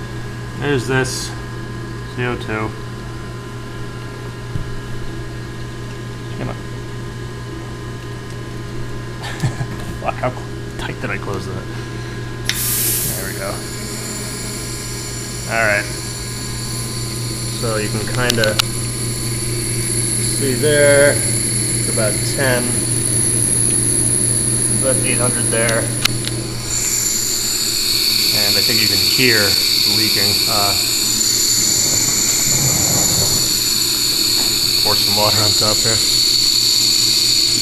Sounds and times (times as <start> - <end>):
Speech: 0.6 - 1.4, 2.1 - 2.8, 6.4 - 6.6, 10.0 - 11.7, 17.6 - 18.6, 20.4 - 21.3, 24.8 - 25.9, 28.4 - 30.9, 34.8 - 36.1.